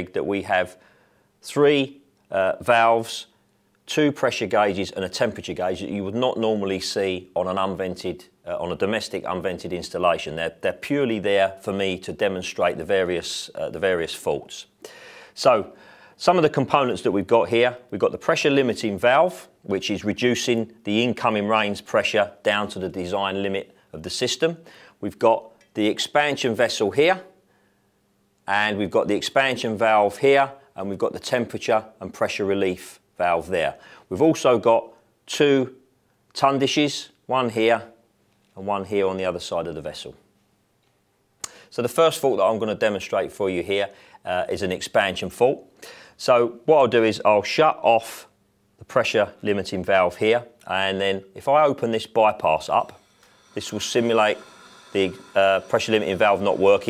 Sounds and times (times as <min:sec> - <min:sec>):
Speech: 0:00.0 - 0:00.8, 0:01.4 - 0:03.3, 0:03.9 - 0:14.8, 0:15.4 - 0:27.4, 0:28.4 - 0:38.0, 0:38.6 - 0:40.2, 0:41.7 - 0:53.0, 0:53.6 - 0:56.8.